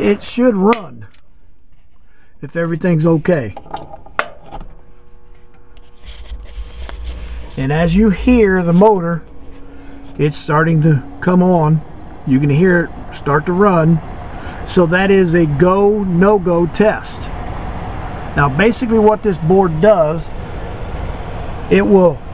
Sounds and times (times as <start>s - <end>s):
Speech: 0.0s - 1.2s, 2.4s - 3.6s, 7.6s - 9.2s, 10.2s - 14.0s, 14.7s - 17.3s, 18.4s - 20.3s, 21.7s - 22.2s.